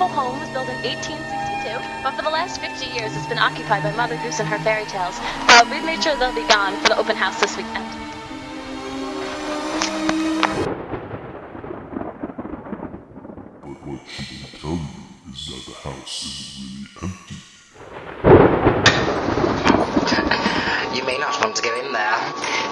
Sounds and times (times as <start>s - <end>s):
Speech: 0.0s - 7.9s, 13.6s - 17.4s, 20.8s - 22.4s
Music: 0.0s - 10.7s, 19.7s - 22.7s.